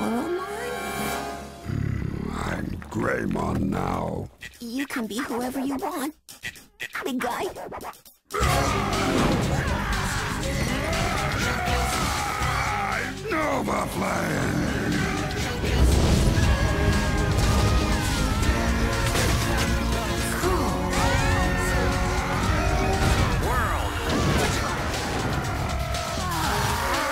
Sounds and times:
Music: 0:00.0 - 0:01.8, 0:08.4 - 0:27.1
Speech: 0:02.2 - 0:06.2, 0:06.8 - 0:07.6, 0:12.9 - 0:14.6.

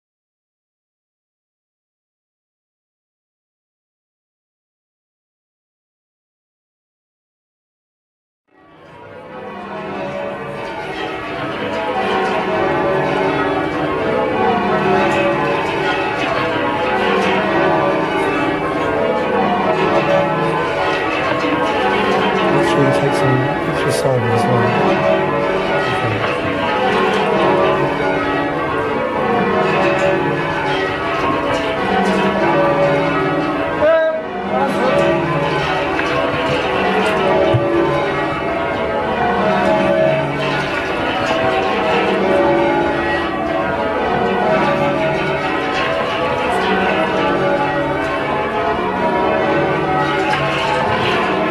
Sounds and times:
Speech: 0:22.6 - 0:24.8, 0:26.0 - 0:26.3, 0:33.8 - 0:34.8.

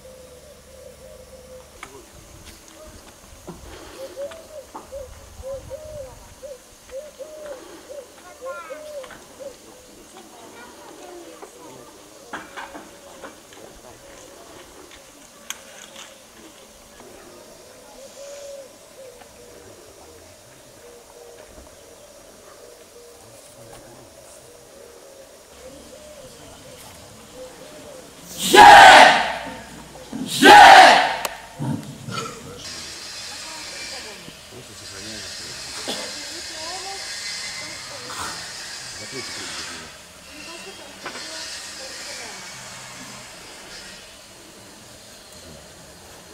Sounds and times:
Bird vocalization, bird call, bird song: 0:00.0 - 0:02.0, 0:03.9 - 0:10.2, 0:17.3 - 0:28.2
Coo: 0:00.0 - 0:02.1, 0:03.8 - 0:10.0, 0:17.1 - 0:28.2.

